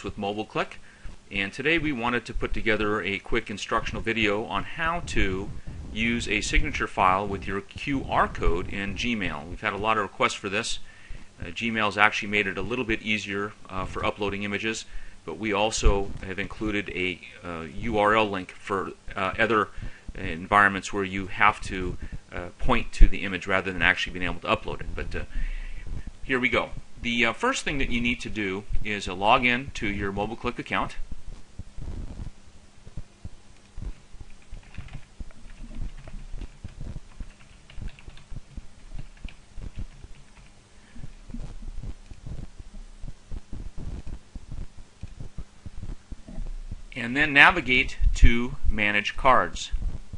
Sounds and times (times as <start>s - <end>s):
Speech: 0.0s - 10.8s, 11.4s - 25.3s, 26.2s - 31.0s, 47.0s - 49.8s.